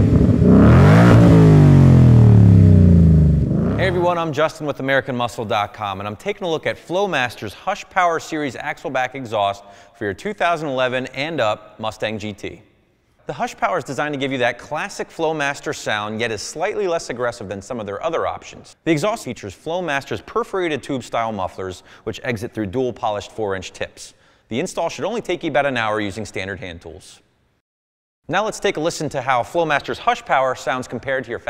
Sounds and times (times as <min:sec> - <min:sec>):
Speech: 0:03.8 - 0:27.3, 0:28.3 - 0:31.4.